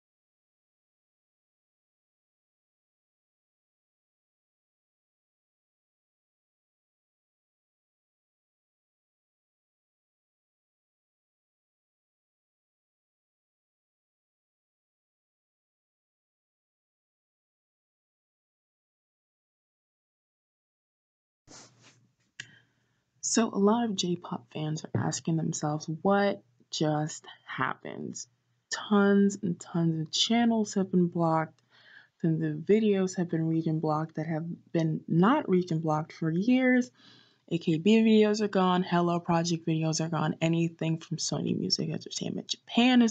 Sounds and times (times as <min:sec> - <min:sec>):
Speech: 0:23.2 - 0:31.5, 0:32.2 - 0:36.9, 0:37.5 - 0:43.1.